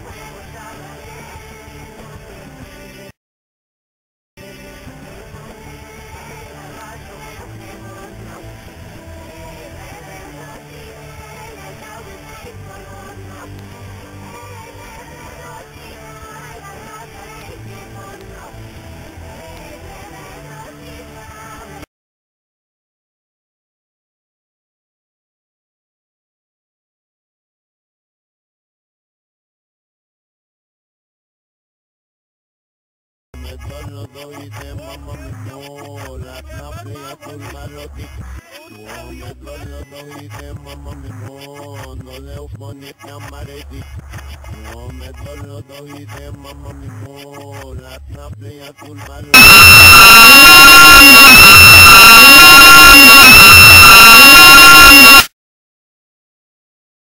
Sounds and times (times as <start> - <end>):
Music: 0.0 - 3.2, 4.4 - 21.9, 33.4 - 49.4.